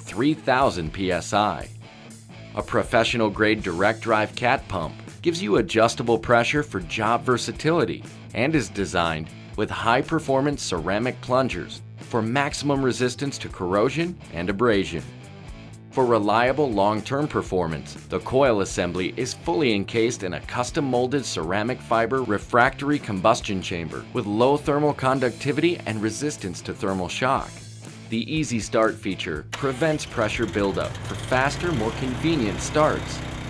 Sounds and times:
Speech: 0.0s - 1.7s, 2.6s - 15.1s, 16.0s - 33.2s
Music: 0.0s - 33.4s.

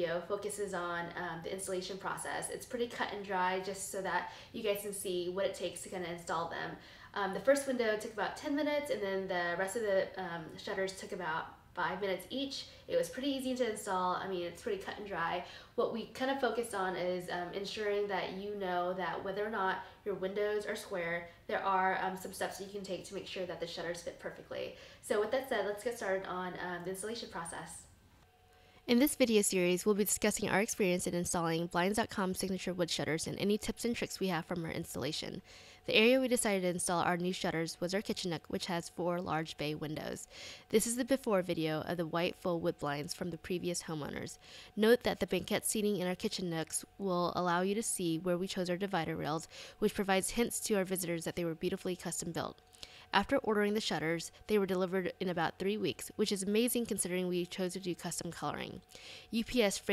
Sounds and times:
Speech: 0.0s - 27.9s, 28.9s - 59.9s.

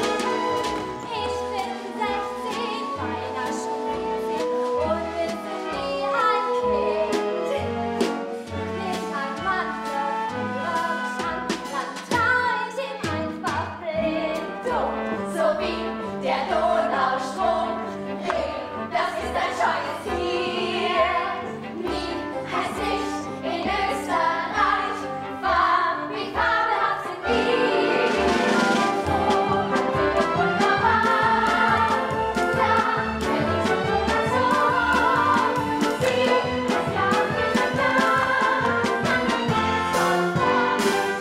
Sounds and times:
Opera: 0.0s - 41.2s.

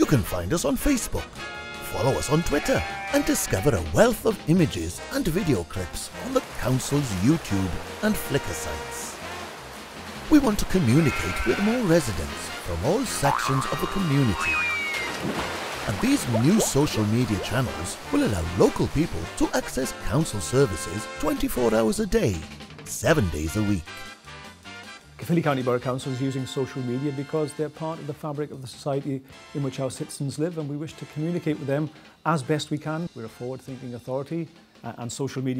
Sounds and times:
Speech: 0.0s - 9.2s, 10.3s - 14.6s, 15.9s - 24.0s, 25.2s - 35.5s
Music: 0.0s - 35.5s.

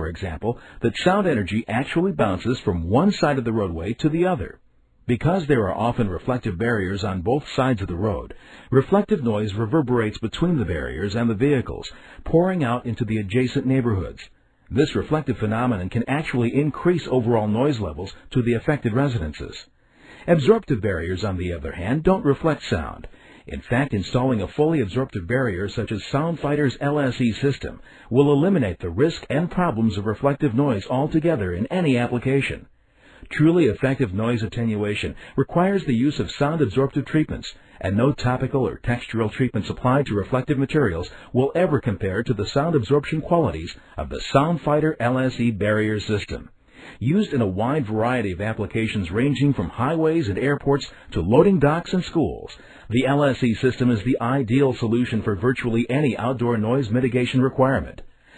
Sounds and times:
Speech: 0.0s - 58.1s.

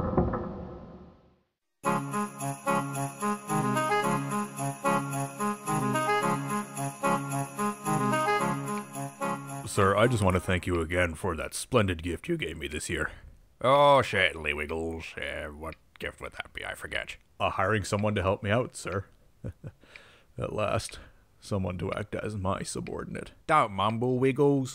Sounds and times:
Music: 1.8s - 10.7s
Speech: 9.7s - 19.1s, 20.4s - 24.7s.

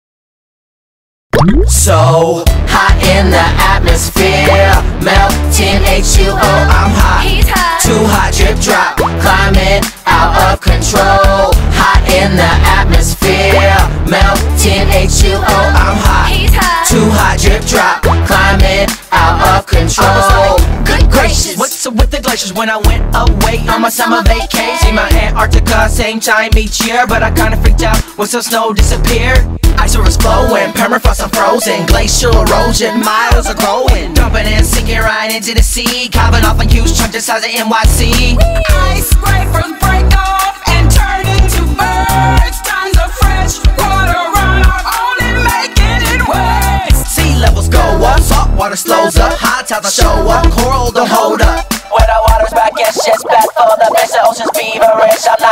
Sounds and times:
Music: 1.4s - 53.1s.

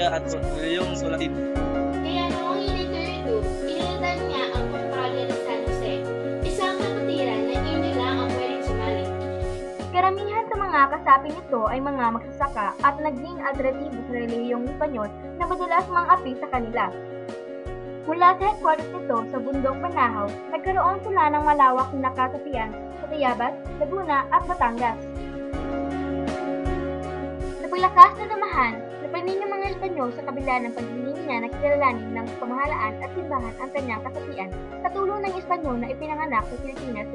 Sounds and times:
Speech: 0.0s - 1.4s, 2.1s - 9.1s, 10.0s - 16.9s, 18.1s - 25.0s, 27.7s - 37.1s
Music: 0.0s - 37.1s.

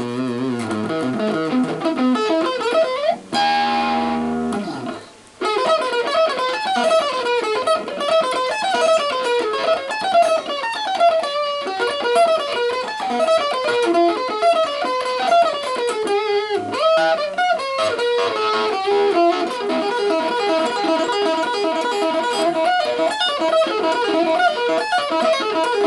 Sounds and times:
Electric guitar: 0.0s - 25.8s.

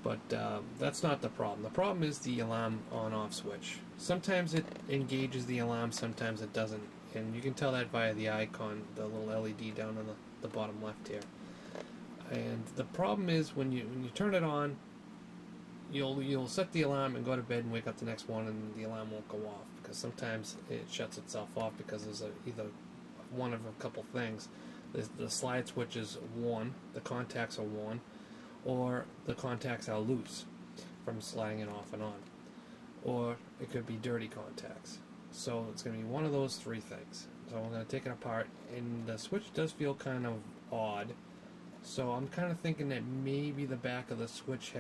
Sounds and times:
Speech: 0.0s - 11.3s, 12.2s - 14.8s, 15.9s - 32.3s, 33.0s - 41.2s, 41.8s - 44.8s.

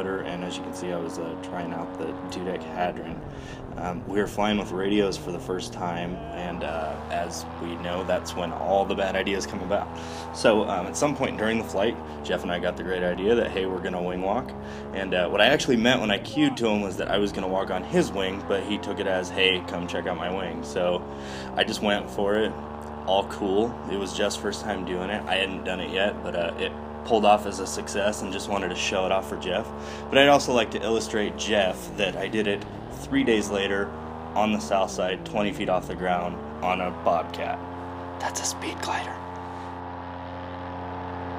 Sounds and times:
Speech: 0.0s - 39.3s.

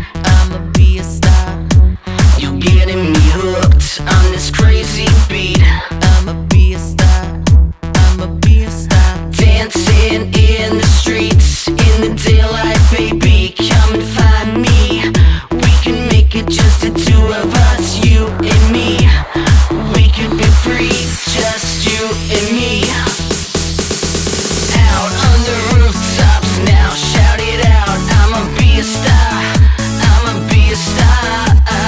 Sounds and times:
Dance music: 0.0s - 31.8s.

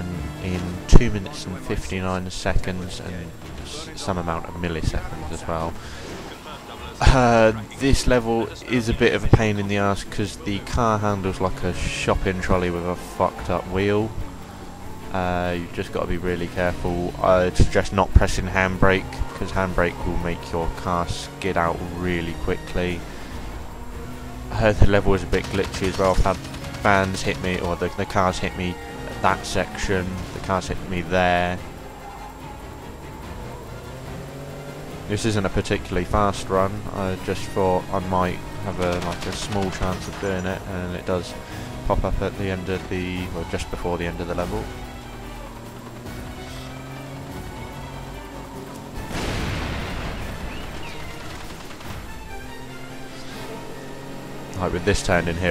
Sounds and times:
Speech: 0.0s - 14.1s, 15.1s - 23.0s, 24.5s - 31.6s, 35.1s - 44.7s, 54.6s - 55.5s
Music: 0.0s - 55.5s.

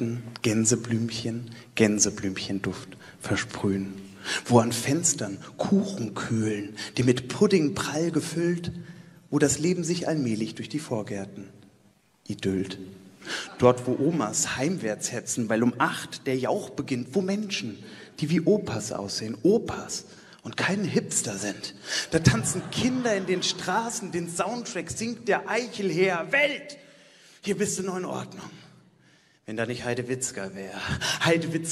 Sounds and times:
Speech: 0.0s - 11.5s, 12.2s - 12.9s, 13.5s - 26.8s, 27.4s - 28.6s, 29.5s - 31.7s.

